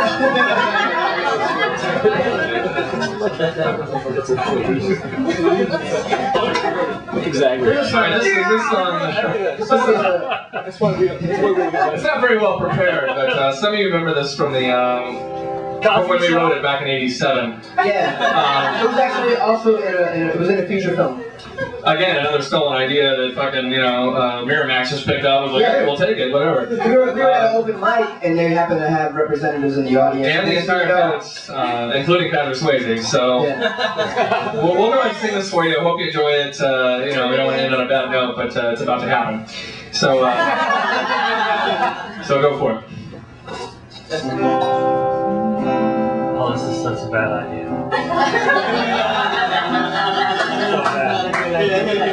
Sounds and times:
Speech: 1.2s - 15.2s, 15.8s - 33.7s, 34.5s - 40.5s, 42.2s - 44.4s, 46.4s - 47.7s
Music: 14.6s - 18.2s, 44.2s - 51.2s.

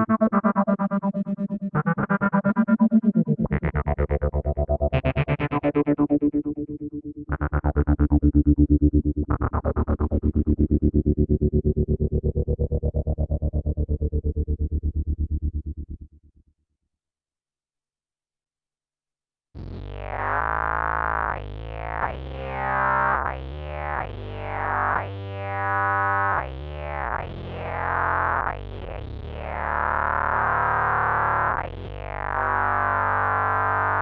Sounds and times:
Effects unit: 0.0s - 16.4s, 19.6s - 34.0s.

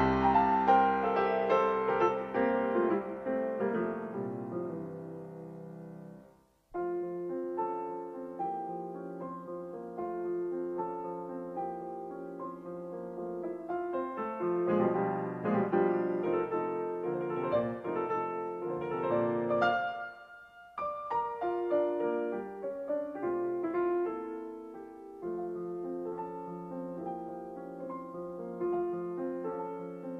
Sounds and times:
Piano: 0.0s - 30.1s.

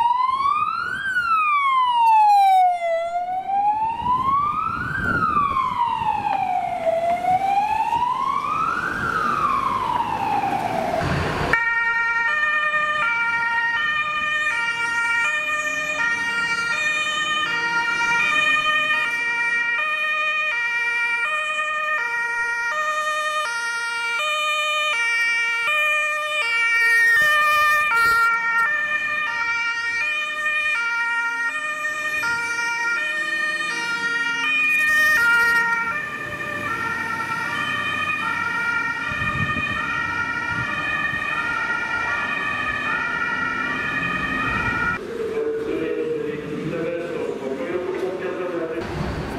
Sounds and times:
Fire engine, fire truck (siren): 0.0s - 49.3s.

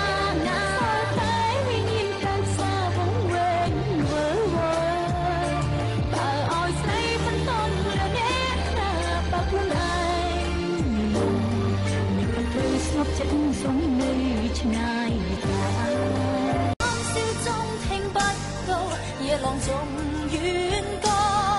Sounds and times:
Music: 0.0s - 21.5s.

